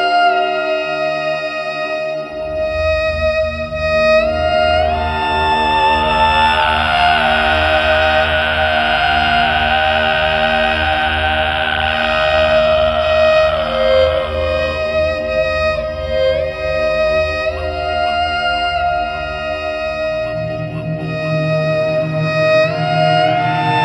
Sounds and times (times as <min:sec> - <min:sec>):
Music: 0:00.0 - 0:23.8.